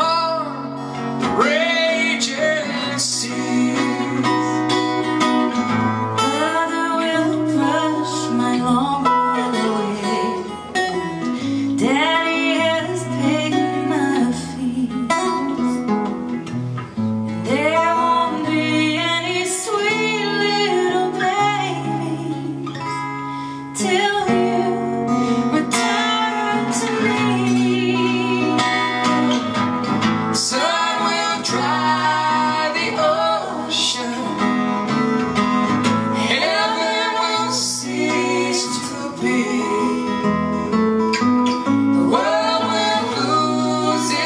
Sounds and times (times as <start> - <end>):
Singing: 0.0 - 4.8, 6.2 - 11.2, 25.6 - 29.1, 30.4 - 34.9, 36.2 - 40.3, 42.0 - 44.2
Inside, large room or hall: 0.0 - 44.2
Jazz: 0.0 - 44.2.